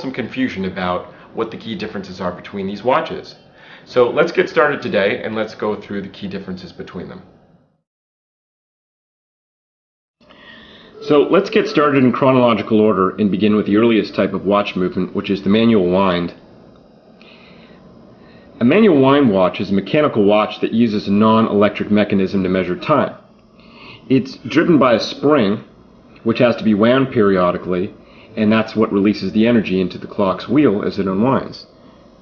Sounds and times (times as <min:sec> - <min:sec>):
Speech: 0:00.0 - 0:07.3, 0:11.0 - 0:16.4, 0:18.6 - 0:23.2, 0:24.0 - 0:31.7.